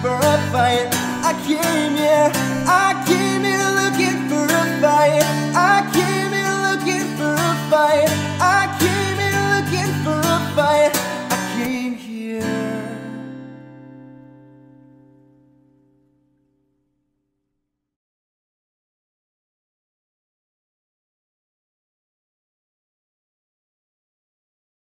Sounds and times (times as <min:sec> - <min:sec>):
Guitar: 0:00.0 - 0:17.5.